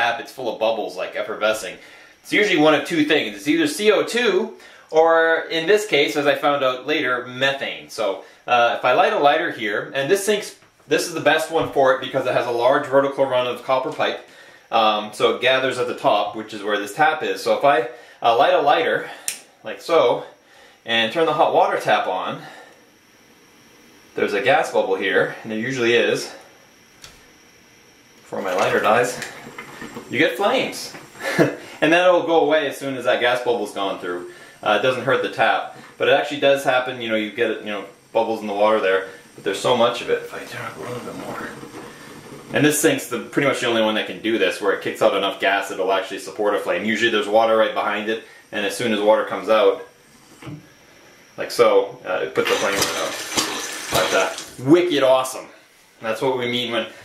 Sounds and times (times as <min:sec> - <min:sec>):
Speech: 0:00.0 - 0:22.6, 0:24.2 - 0:26.5, 0:28.3 - 0:29.4, 0:30.1 - 0:41.7, 0:42.5 - 0:49.9, 0:51.4 - 0:53.2, 0:54.0 - 0:57.0.